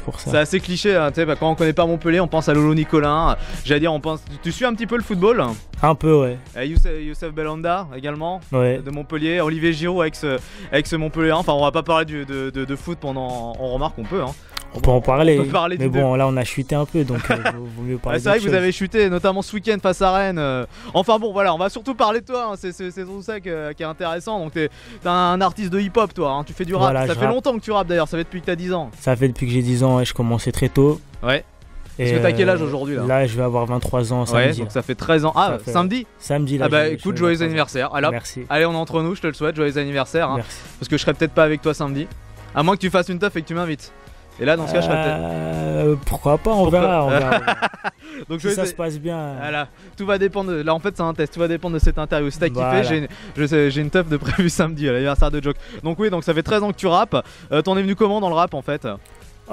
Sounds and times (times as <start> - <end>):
Speech: 0.0 - 31.4, 32.0 - 47.4, 48.3 - 59.5
Music: 0.0 - 59.5.